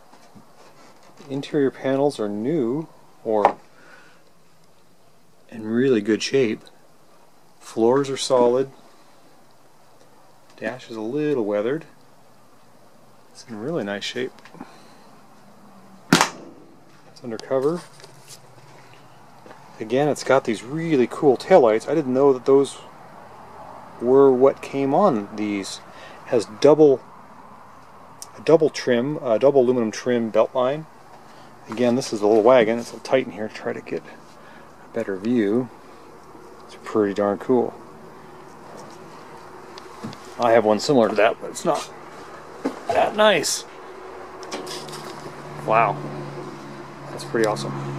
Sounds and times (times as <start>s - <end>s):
Speech: 1.2s - 3.6s, 5.5s - 6.7s, 7.6s - 8.8s, 10.6s - 12.0s, 13.4s - 14.4s, 17.2s - 18.0s, 19.8s - 22.9s, 24.0s - 27.0s, 28.2s - 30.9s, 31.6s - 34.2s, 34.9s - 35.7s, 36.7s - 37.8s, 40.4s - 42.0s, 42.9s - 43.7s, 45.6s - 46.0s, 47.1s - 47.8s.